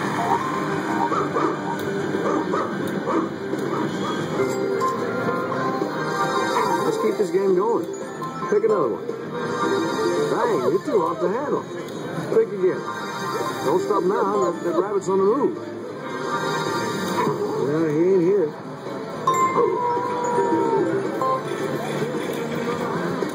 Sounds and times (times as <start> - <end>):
Music: 0.0 - 23.3.